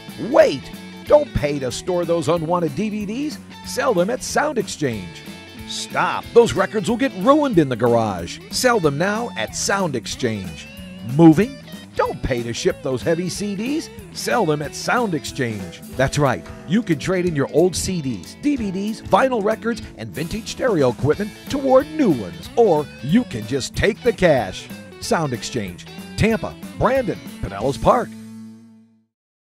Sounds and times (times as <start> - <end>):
Music: 0.0 - 29.1
Speech: 0.2 - 28.2.